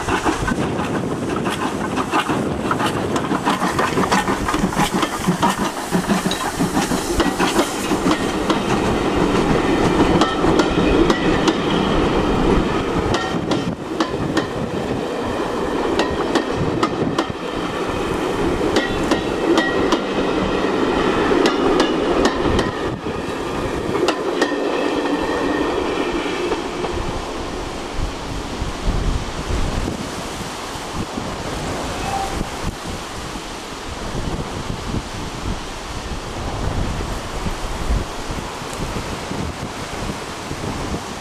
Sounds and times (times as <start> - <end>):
Train: 0.0 - 41.2.